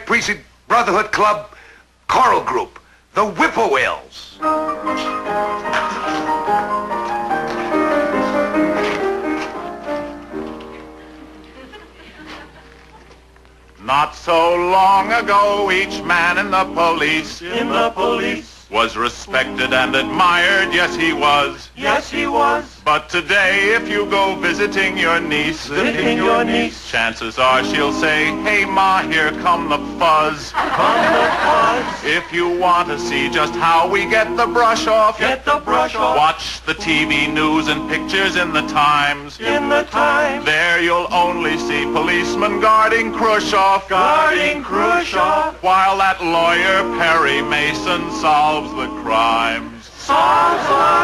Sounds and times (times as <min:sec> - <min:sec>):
Music: 0:04.4 - 0:12.0, 0:27.4 - 0:30.1, 0:32.4 - 0:45.4, 0:46.3 - 0:51.0.